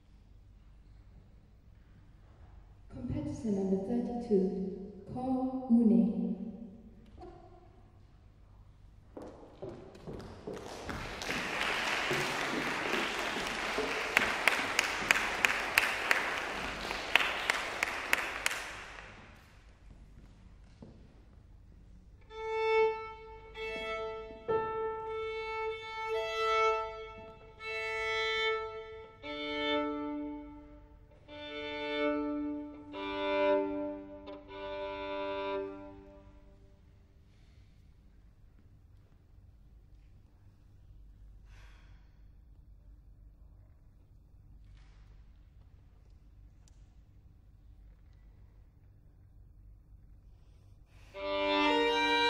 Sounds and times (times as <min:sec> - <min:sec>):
Violin, fiddle: 0:22.2 - 0:36.5, 0:51.1 - 0:52.2.